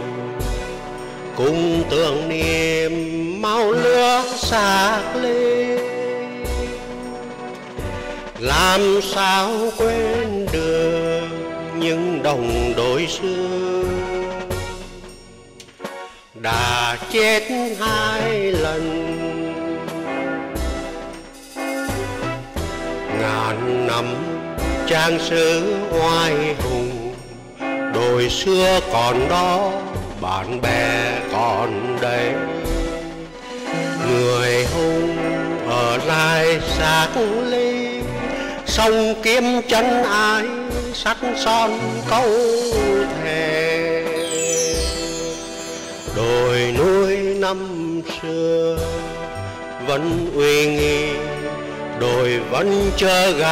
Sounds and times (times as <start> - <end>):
Music: 0.0 - 53.5.